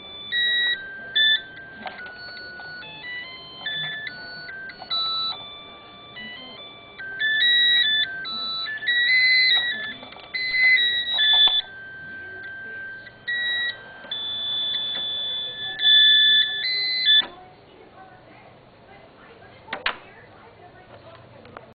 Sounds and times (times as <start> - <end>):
Music: 0.0 - 17.3
Speech: 0.0 - 21.7.